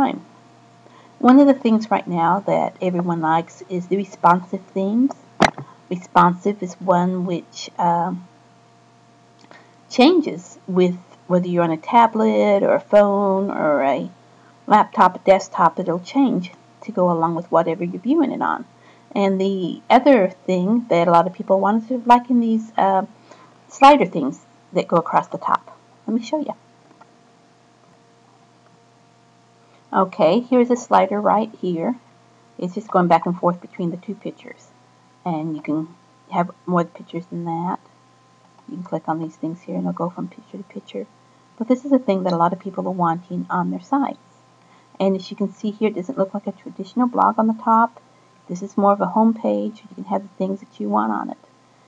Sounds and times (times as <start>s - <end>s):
Speech: 0.0s - 0.3s, 1.2s - 8.3s, 9.9s - 14.1s, 14.7s - 23.1s, 23.7s - 26.6s, 29.9s - 32.0s, 32.6s - 34.7s, 35.3s - 37.8s, 38.7s - 44.2s, 45.0s - 51.4s.